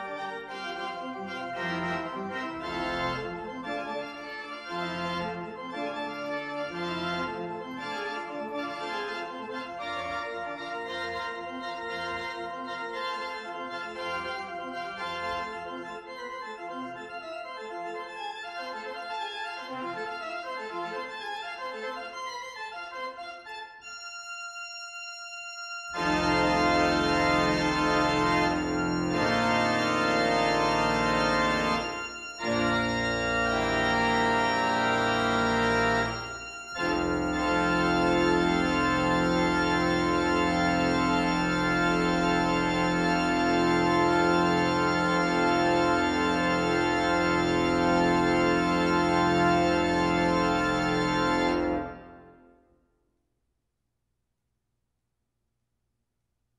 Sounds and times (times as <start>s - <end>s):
Electronic organ: 0.0s - 52.6s.